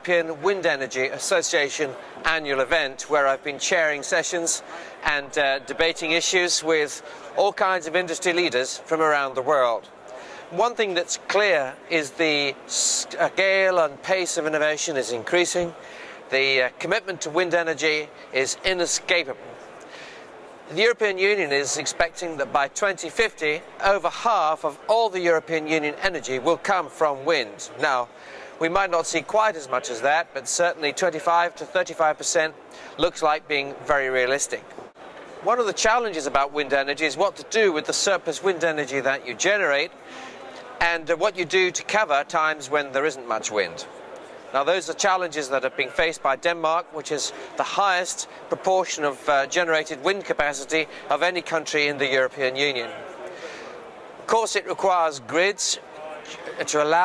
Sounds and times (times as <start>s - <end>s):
Speech: 0.0s - 9.9s, 10.5s - 19.4s, 20.7s - 34.7s, 35.4s - 43.9s, 44.5s - 53.1s, 54.3s - 57.0s.